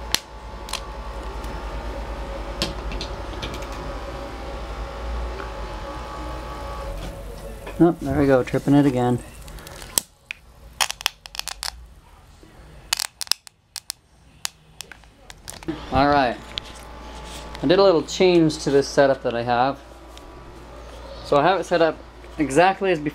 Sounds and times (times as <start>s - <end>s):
Speech: 7.2s - 9.4s, 14.8s - 16.4s, 17.6s - 19.8s, 21.3s - 23.1s.